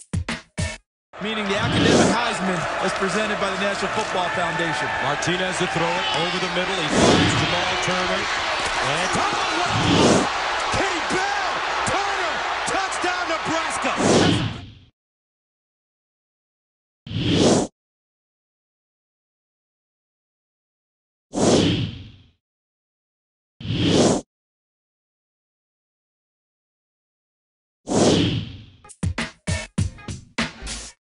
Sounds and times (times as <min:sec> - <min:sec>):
Music: 0:00.0 - 0:00.9, 0:28.8 - 0:31.0.